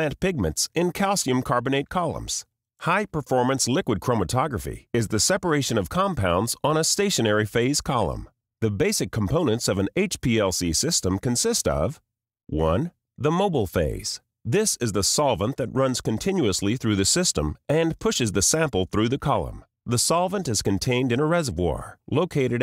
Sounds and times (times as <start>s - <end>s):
Speech: 0.0s - 22.6s.